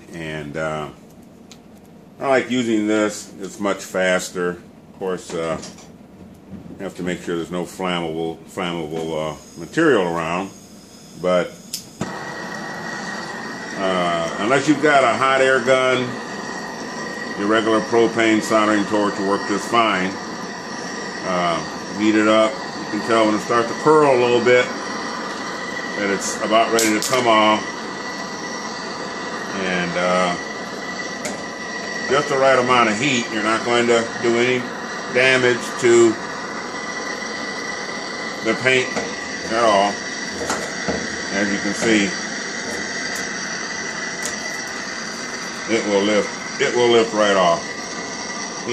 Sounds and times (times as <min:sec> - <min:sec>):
Speech: 0:00.1 - 0:01.0, 0:02.2 - 0:05.8, 0:06.8 - 0:10.6, 0:11.2 - 0:11.6, 0:13.8 - 0:16.2, 0:17.4 - 0:20.2, 0:21.2 - 0:24.8, 0:26.0 - 0:27.7, 0:29.6 - 0:30.4, 0:32.1 - 0:36.2, 0:38.4 - 0:40.0, 0:41.3 - 0:42.2, 0:45.7 - 0:47.7.